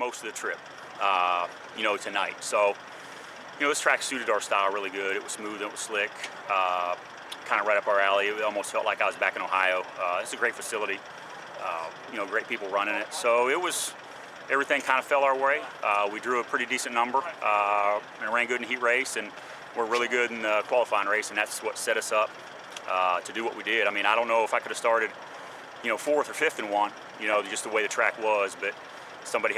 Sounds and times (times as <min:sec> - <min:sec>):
Speech: 0:00.0 - 0:02.8, 0:03.6 - 0:11.0, 0:11.6 - 0:13.9, 0:14.5 - 0:22.3, 0:22.9 - 0:25.1, 0:25.8 - 0:29.5
Vehicle: 0:00.0 - 0:29.5.